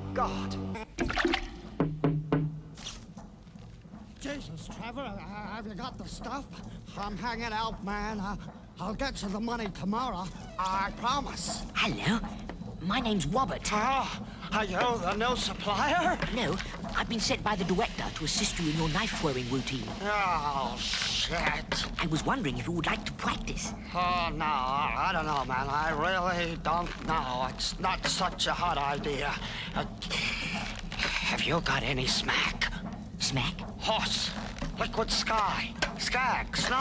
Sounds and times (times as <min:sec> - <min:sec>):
Speech: 0:04.2 - 0:30.6, 0:31.2 - 0:36.8.